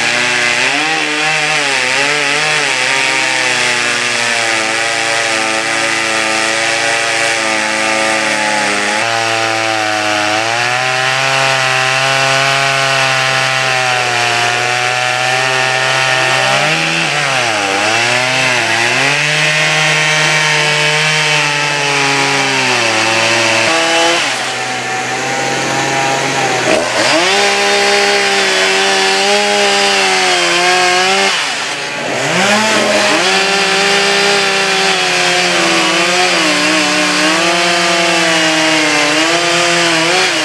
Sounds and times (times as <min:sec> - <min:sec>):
Sawing: 0:00.0 - 0:40.4
Wood: 0:00.0 - 0:40.4.